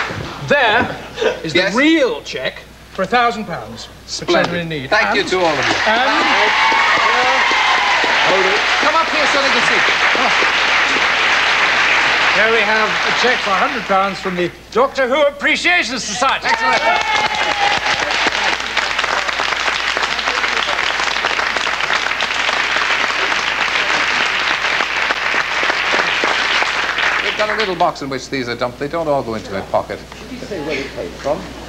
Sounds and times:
Applause: 5.4s - 14.2s, 16.4s - 27.8s.

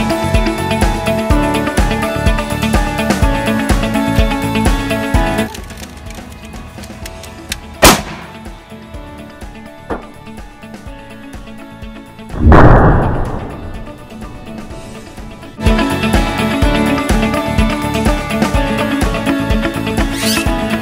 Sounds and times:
Music: 0.0s - 20.8s.

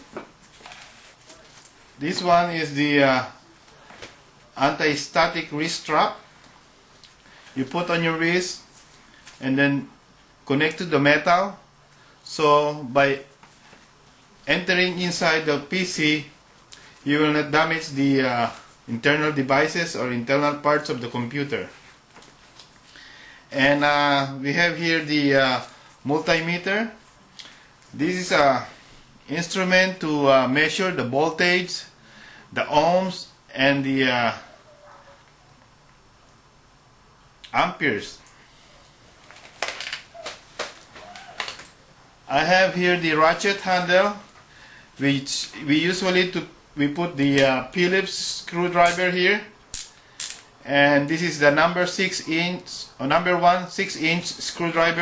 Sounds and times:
Speech: 1.3s - 3.5s, 4.5s - 6.2s, 7.6s - 8.7s, 9.4s - 13.3s, 14.5s - 16.4s, 17.0s - 21.8s, 23.5s - 27.0s, 27.9s - 34.5s, 37.5s - 38.3s, 42.3s - 44.3s, 45.0s - 49.6s, 50.6s - 55.0s.

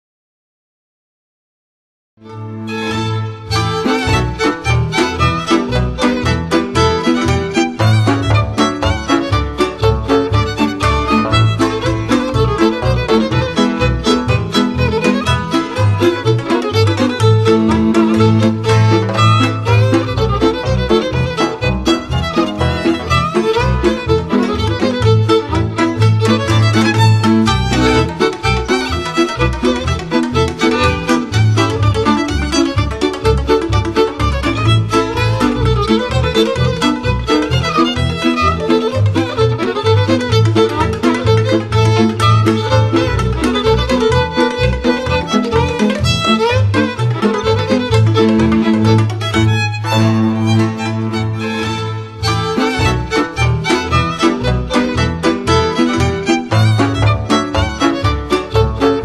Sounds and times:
Music: 2.2s - 59.0s.

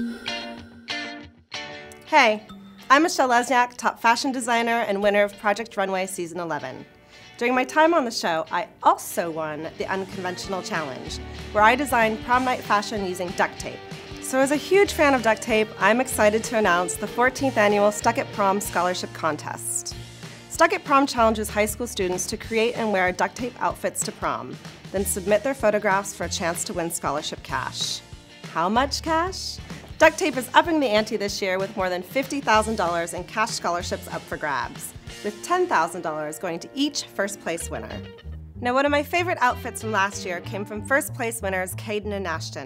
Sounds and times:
Music: 0.0s - 42.6s
Speech: 2.0s - 42.6s.

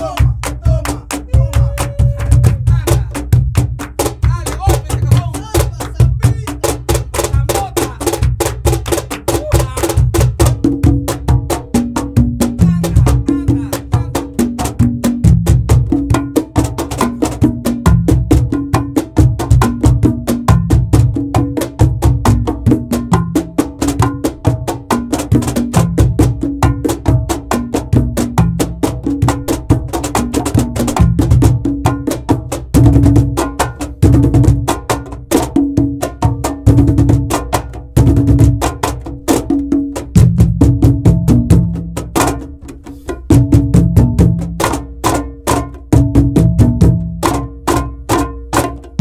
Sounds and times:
Percussion: 0.0s - 49.0s.

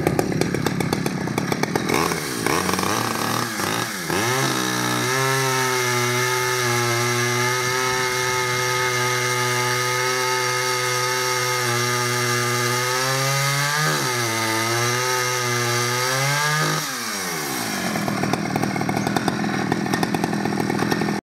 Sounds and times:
Chainsaw: 0.0s - 21.2s.

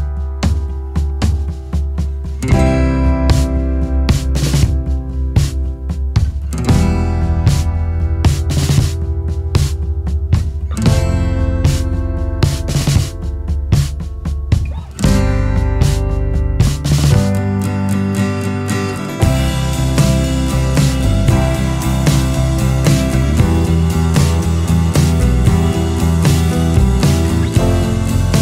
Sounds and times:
Music: 0.0s - 28.4s.

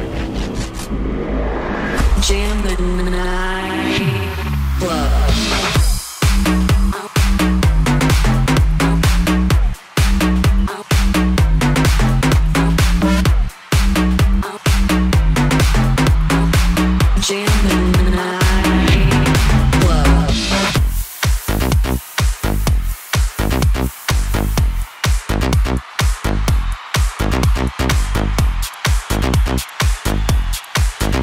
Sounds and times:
Disco: 2.2s - 31.2s.

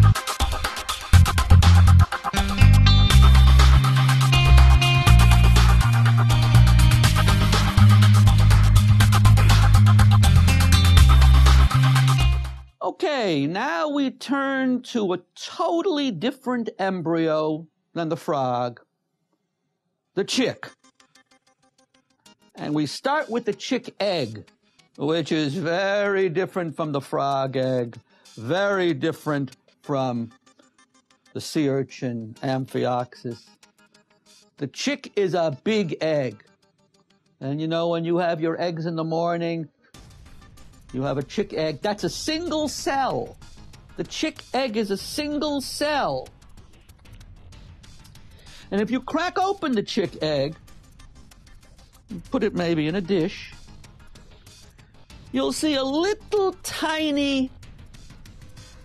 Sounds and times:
Music: 0.0s - 13.7s, 20.2s - 58.8s
Speech: 12.8s - 18.8s, 20.2s - 20.7s, 22.6s - 24.4s, 25.0s - 30.3s, 31.4s - 33.4s, 34.6s - 36.4s, 37.4s - 39.7s, 41.0s - 43.3s, 44.0s - 46.3s, 48.7s - 50.6s, 52.1s - 53.6s, 55.4s - 57.5s.

